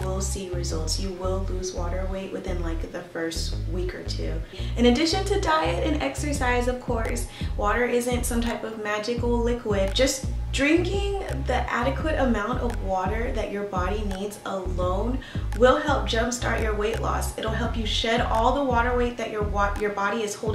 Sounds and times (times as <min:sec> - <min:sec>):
Music: 0:00.0 - 0:20.5
Speech: 0:00.0 - 0:20.5.